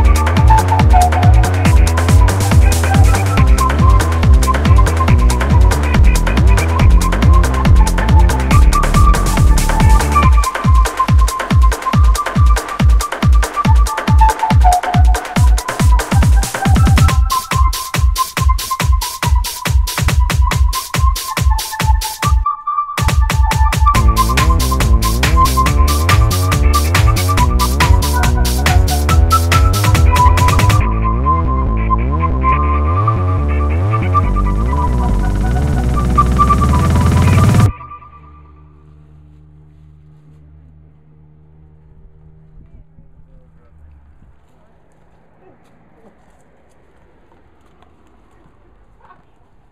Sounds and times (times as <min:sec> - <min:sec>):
Music: 0:00.0 - 0:38.9
Outside, urban or manmade: 0:00.0 - 0:49.7.